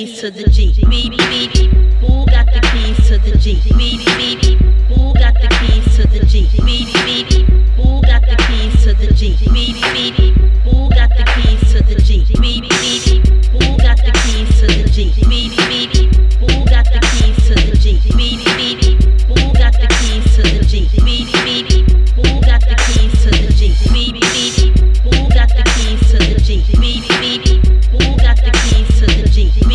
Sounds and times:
Music: 0:00.0 - 0:29.7.

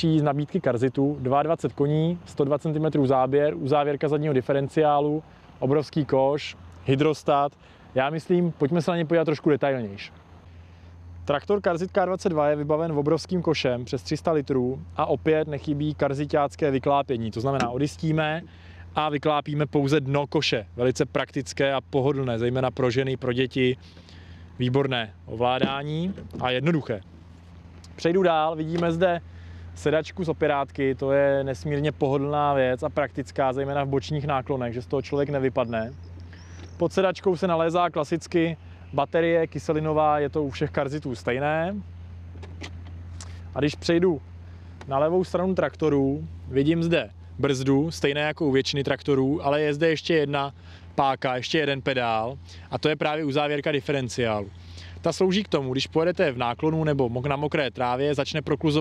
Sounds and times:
Speech: 0:00.0 - 0:10.1, 0:11.2 - 0:23.8, 0:24.6 - 0:27.1, 0:27.9 - 0:29.2, 0:29.8 - 0:36.0, 0:36.8 - 0:41.9, 0:43.5 - 0:44.2, 0:44.8 - 0:58.8
Vehicle: 0:00.0 - 0:58.8.

